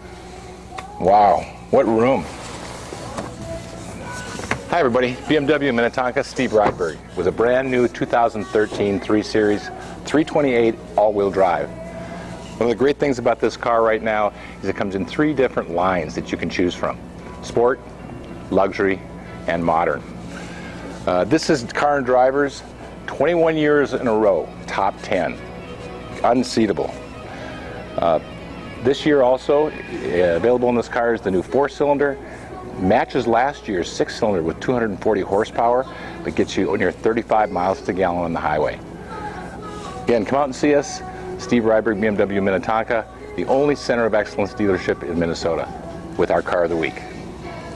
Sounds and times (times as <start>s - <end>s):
Music: 0.0s - 47.7s
Speech: 1.0s - 2.3s, 4.7s - 11.7s, 12.6s - 17.8s, 21.1s - 25.4s, 26.2s - 27.0s, 28.8s - 32.2s, 32.8s - 38.8s, 40.1s - 47.1s.